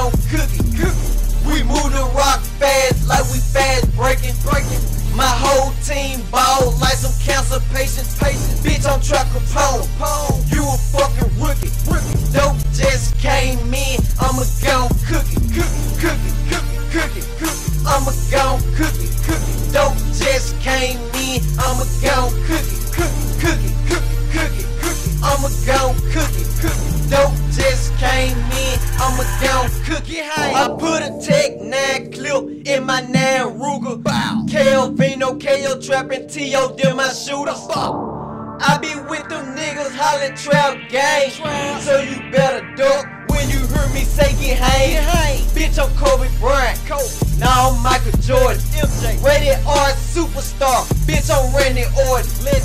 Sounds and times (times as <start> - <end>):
Music: 0.0 - 52.6.